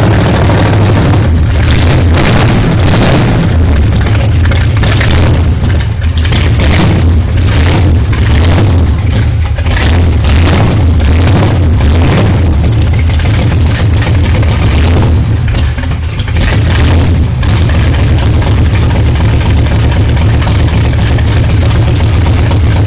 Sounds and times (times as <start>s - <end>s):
Accelerating, revving, vroom: 0.0s - 3.6s, 5.0s - 5.4s, 6.4s - 8.9s, 9.8s - 12.6s, 14.6s - 15.2s, 16.6s - 17.6s
Idling: 0.0s - 22.8s
Medium engine (mid frequency): 0.0s - 22.8s.